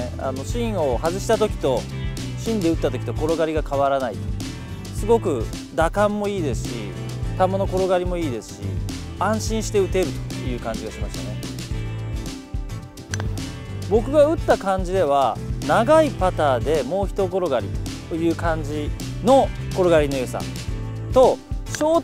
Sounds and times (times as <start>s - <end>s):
Speech: 0.0s - 4.2s, 5.0s - 11.4s, 13.9s - 20.5s, 21.1s - 22.0s
Music: 0.0s - 22.0s.